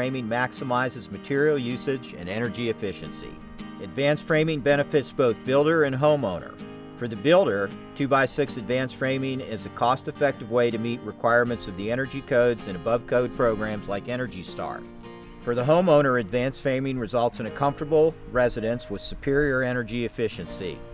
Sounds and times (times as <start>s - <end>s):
Speech: 0.0s - 14.8s, 15.5s - 20.8s
Music: 0.0s - 20.9s.